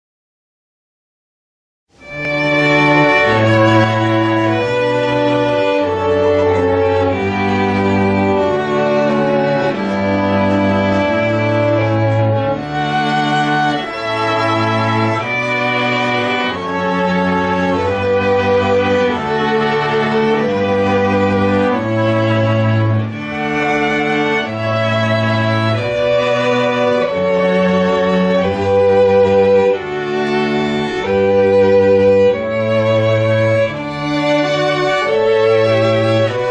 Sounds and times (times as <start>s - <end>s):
Music: 1.9s - 36.5s.